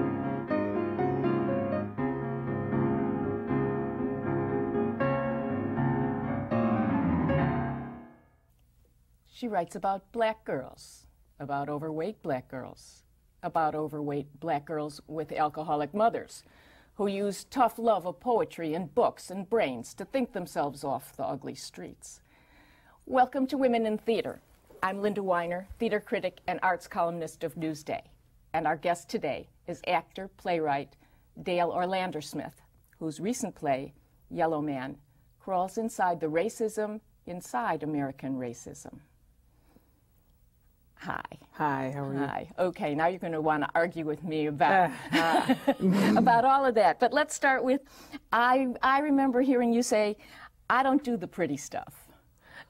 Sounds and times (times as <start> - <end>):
Female speech, woman speaking: 9.3 - 16.4, 17.0 - 22.2, 23.1 - 39.0, 41.0 - 45.3, 45.9 - 52.1.